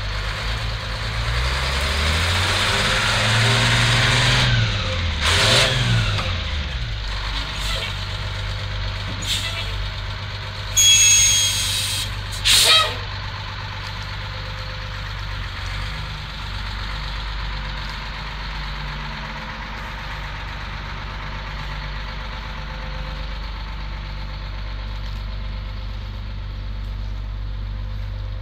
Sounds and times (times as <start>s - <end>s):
Truck: 0.0s - 28.4s.